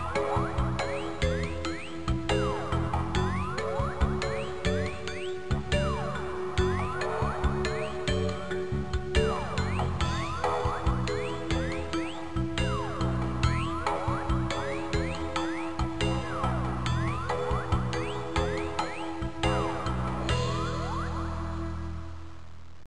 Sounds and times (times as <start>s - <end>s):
Music: 0.0s - 22.8s.